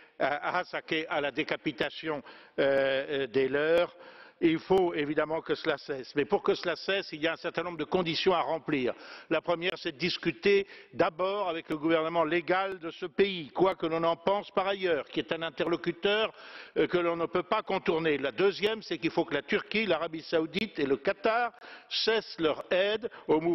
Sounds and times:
Speech: 0.2s - 23.5s.

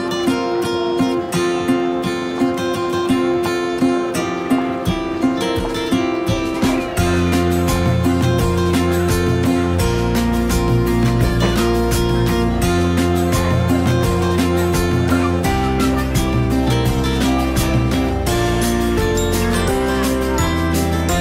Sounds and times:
Music: 0.0s - 21.2s.

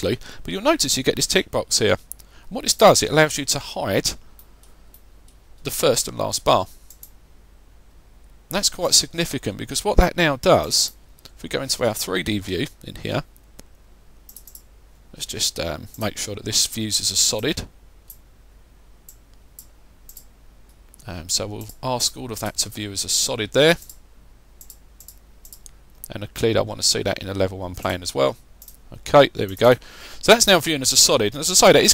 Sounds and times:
Speech: 0.0s - 4.2s, 5.6s - 6.7s, 8.5s - 13.3s, 15.1s - 17.7s, 21.0s - 23.8s, 26.1s - 31.9s
Clicking: 6.9s - 7.2s, 14.3s - 14.7s, 19.1s - 21.0s, 24.6s - 26.1s.

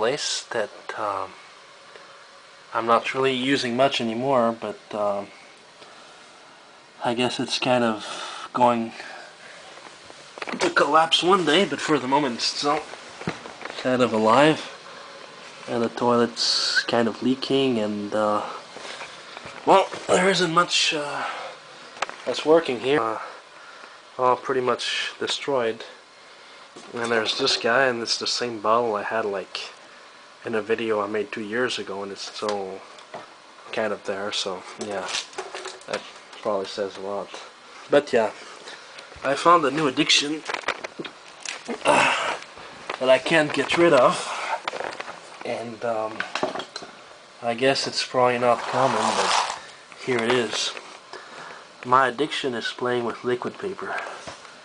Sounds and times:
Speech: 0.0s - 1.4s, 2.7s - 5.4s, 7.0s - 9.3s, 10.5s - 12.9s, 13.8s - 14.8s, 15.7s - 18.6s, 19.6s - 21.5s, 22.3s - 23.4s, 24.2s - 26.0s, 26.8s - 29.8s, 30.4s - 32.9s, 33.7s - 35.2s, 35.9s - 38.4s, 39.2s - 40.5s, 43.0s - 44.6s, 45.4s - 46.3s, 47.4s - 50.8s, 51.8s - 54.2s.

